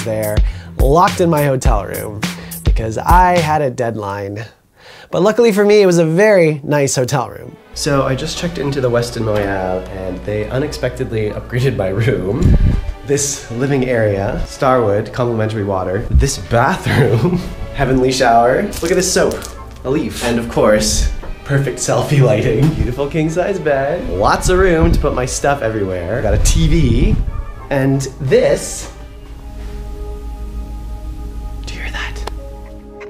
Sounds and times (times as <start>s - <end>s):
Music: 0.0s - 4.3s, 5.2s - 33.1s
Speech: 0.0s - 12.5s, 13.1s - 29.0s.